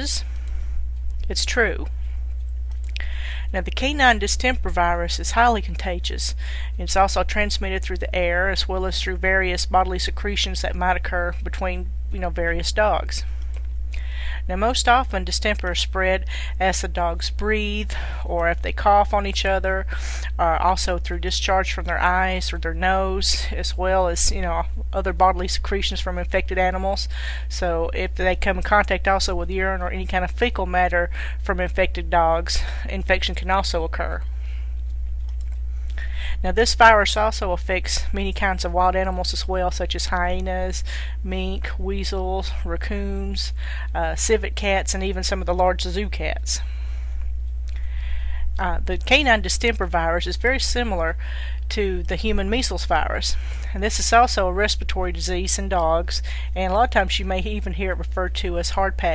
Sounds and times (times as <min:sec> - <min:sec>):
Speech: 0:00.0 - 0:00.2, 0:01.3 - 0:01.9, 0:03.5 - 0:13.2, 0:14.4 - 0:34.2, 0:36.4 - 0:46.6, 0:48.6 - 0:59.1.